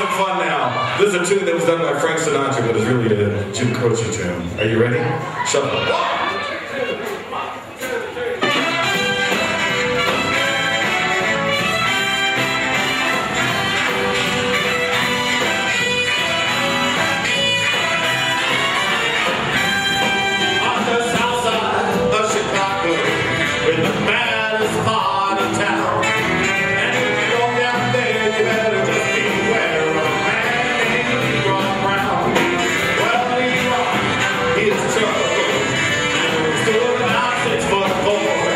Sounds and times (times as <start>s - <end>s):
Orchestra: 8.4s - 38.5s.